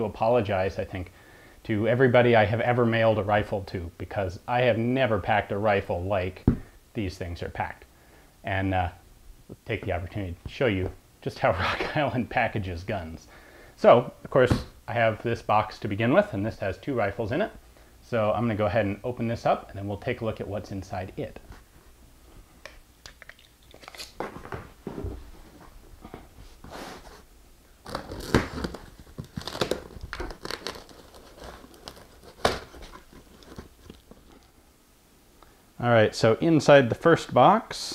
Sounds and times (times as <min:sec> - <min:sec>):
Speech: 0:00.0 - 0:07.9, 0:08.5 - 0:21.5, 0:35.8 - 0:37.9
Inside, small room: 0:00.0 - 0:37.9.